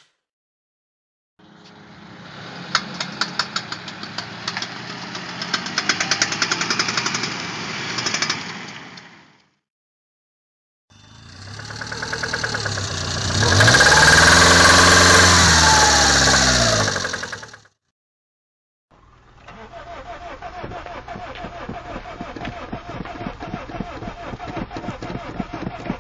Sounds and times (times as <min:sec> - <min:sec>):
Car: 0:01.4 - 0:09.6, 0:11.0 - 0:17.7, 0:19.0 - 0:26.0
Vibration: 0:11.0 - 0:17.7
Engine starting: 0:11.2 - 0:17.7, 0:19.4 - 0:26.0.